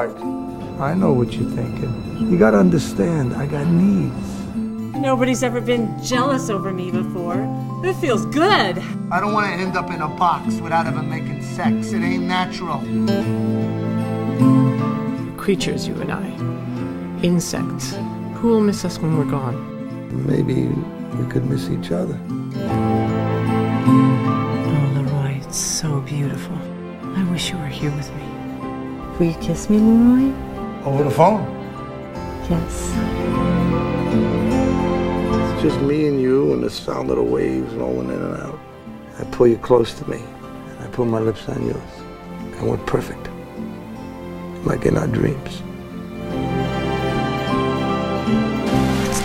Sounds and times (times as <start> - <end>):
Tender music: 0.0 - 49.2.